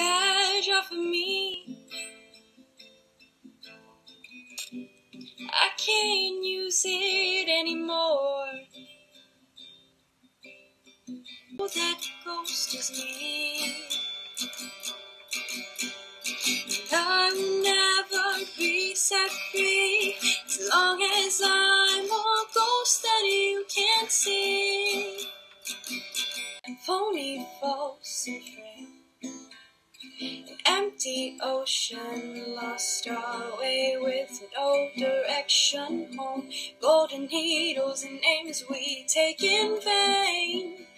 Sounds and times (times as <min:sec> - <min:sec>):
Female singing: 0:00.0 - 0:01.8, 0:05.4 - 0:08.7, 0:11.6 - 0:14.0, 0:16.8 - 0:25.3, 0:26.7 - 0:28.9, 0:30.6 - 0:40.9
Music: 0:00.0 - 0:40.9.